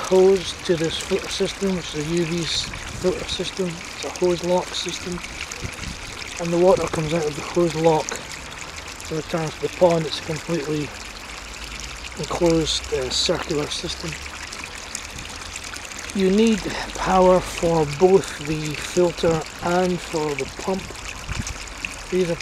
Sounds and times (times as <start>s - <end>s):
Water: 0.0s - 22.4s
Water tap, faucet: 0.0s - 22.4s.